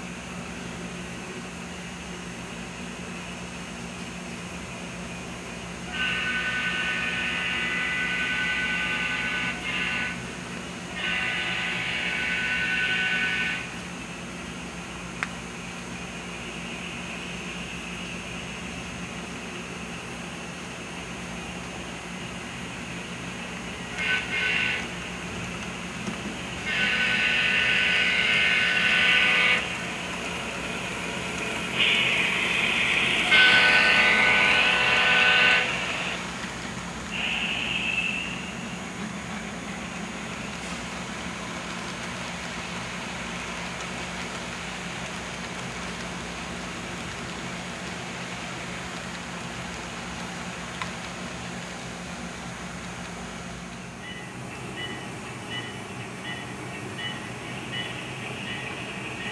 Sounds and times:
Railroad car, train wagon: 0.0 - 59.3
Train: 0.0 - 59.3.

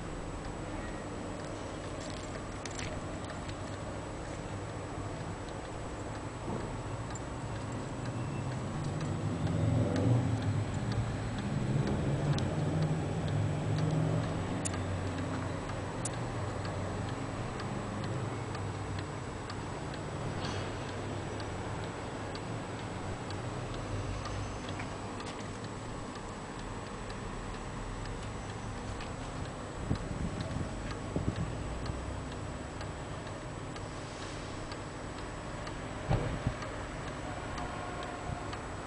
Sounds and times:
Tick-tock: 1.4 - 38.8.

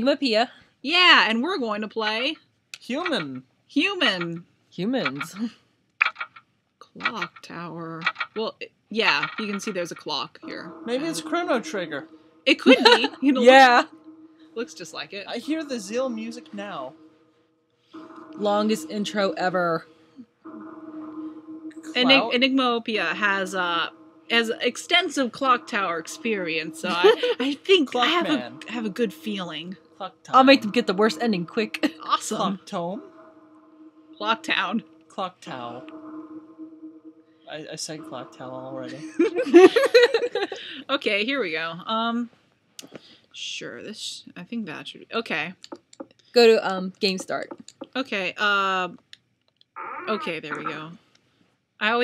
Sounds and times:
Speech: 0.0 - 5.5, 6.8 - 13.9, 14.6 - 16.9, 18.4 - 19.8, 21.9 - 33.1, 34.2 - 35.8, 37.5 - 45.7, 46.4 - 49.1, 50.0 - 51.0.

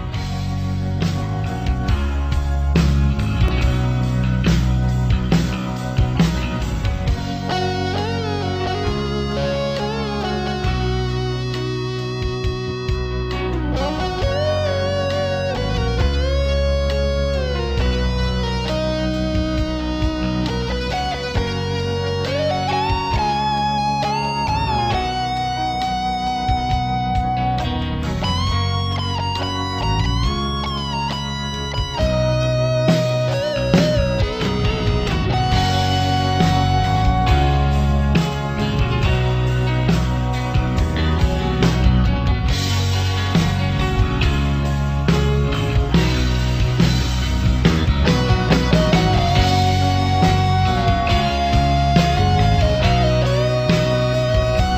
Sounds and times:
Music: 0.0 - 54.7.

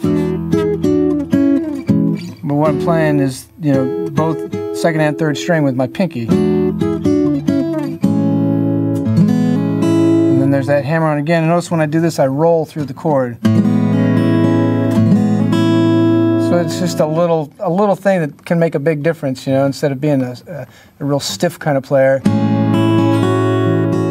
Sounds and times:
Strum: 0.0 - 18.4
Acoustic guitar: 0.0 - 24.1.

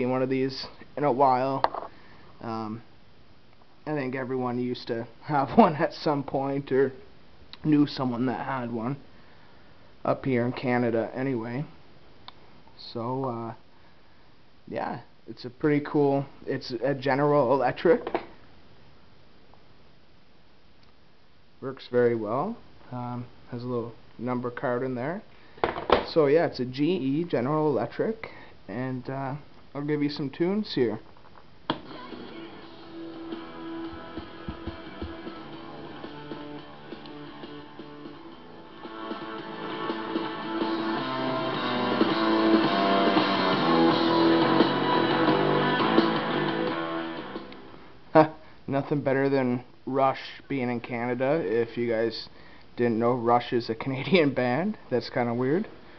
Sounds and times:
Speech: 0.0 - 1.7, 2.4 - 2.9, 3.8 - 9.0, 10.0 - 11.8, 12.8 - 13.6, 14.7 - 18.2, 21.6 - 25.3, 26.0 - 31.1, 48.1 - 55.7.

